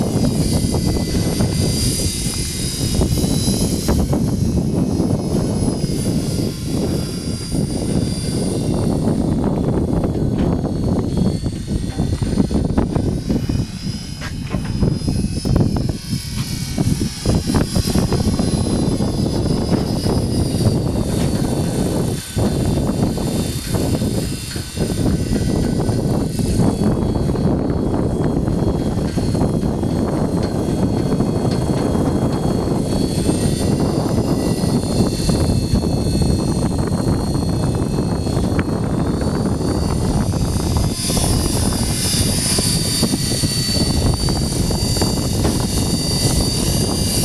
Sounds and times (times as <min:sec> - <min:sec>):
Wind noise (microphone): 0:00.0 - 0:47.2.